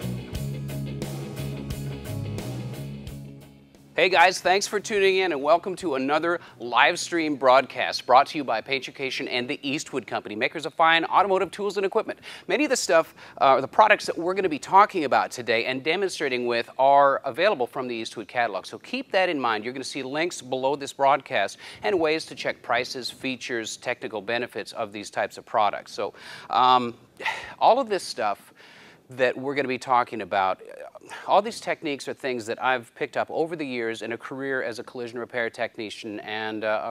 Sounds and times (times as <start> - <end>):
Speech: 4.0 - 28.5, 29.1 - 36.9.